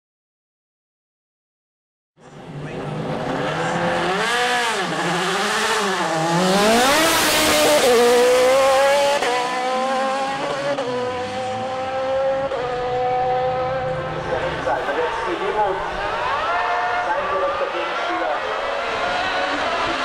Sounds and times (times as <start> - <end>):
Race car, auto racing: 2.2 - 20.0.